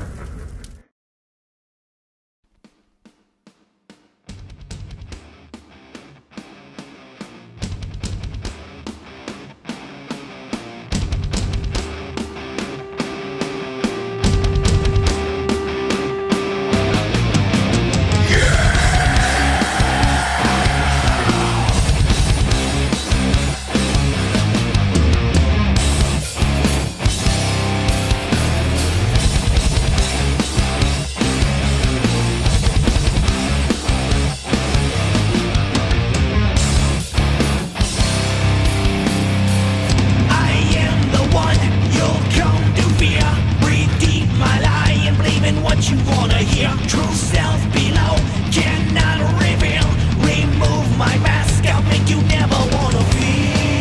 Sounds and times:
Trance music: 11.1 - 26.6.

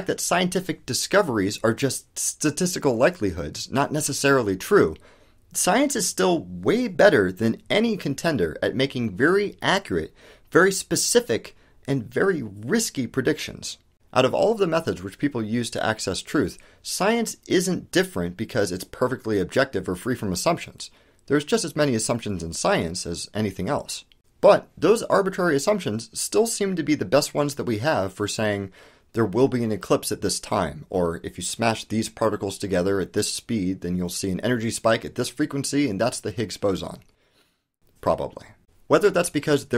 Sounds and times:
Speech: 0.0 - 37.1, 38.0 - 39.7.

